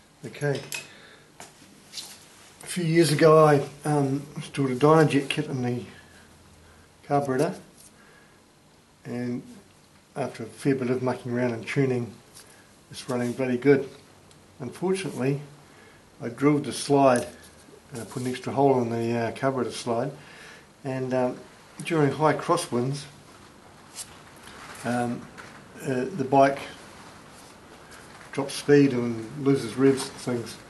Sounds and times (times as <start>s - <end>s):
Speech: 0.2s - 0.8s, 2.6s - 6.0s, 7.0s - 7.7s, 9.0s - 12.2s, 12.9s - 14.0s, 14.6s - 15.6s, 16.2s - 20.2s, 20.8s - 23.2s, 24.8s - 26.8s, 28.3s - 30.6s.